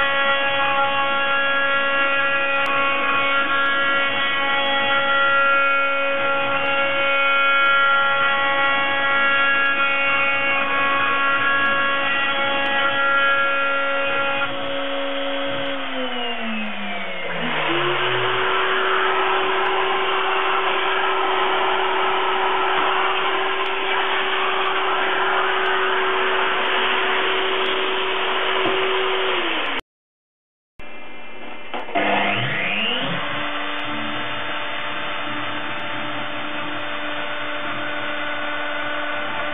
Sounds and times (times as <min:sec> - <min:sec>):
Power tool: 0:00.0 - 0:29.8, 0:30.9 - 0:39.5.